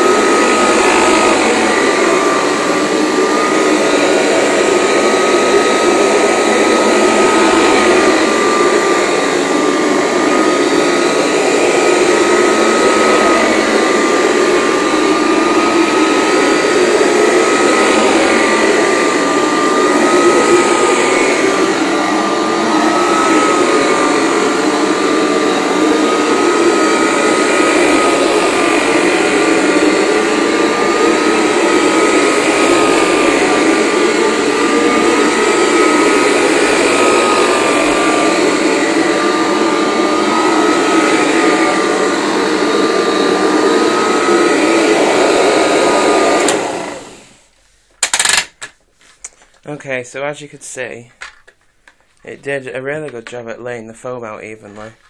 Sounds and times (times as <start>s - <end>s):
Vacuum cleaner: 0.0s - 49.7s.